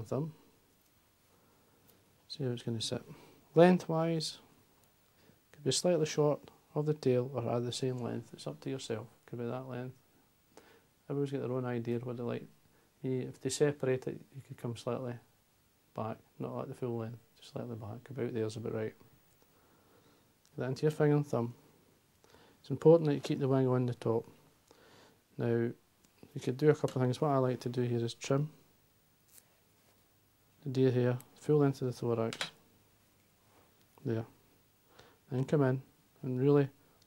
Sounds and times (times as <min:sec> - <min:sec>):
Speech: 0:00.0 - 0:00.4, 0:02.3 - 0:04.5, 0:05.6 - 0:10.0, 0:11.1 - 0:15.3, 0:15.9 - 0:19.0, 0:20.5 - 0:21.6, 0:22.6 - 0:24.4, 0:25.4 - 0:28.6, 0:30.6 - 0:32.6, 0:34.0 - 0:34.4, 0:35.3 - 0:36.8.